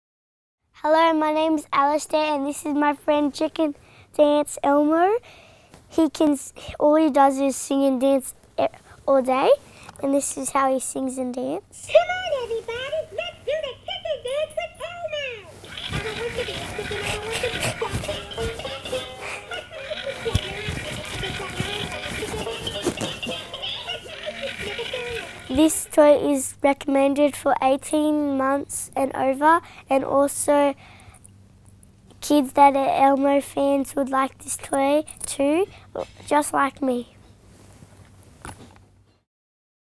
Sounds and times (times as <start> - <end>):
Speech: 6.0 - 17.9, 24.6 - 30.8, 32.2 - 37.1.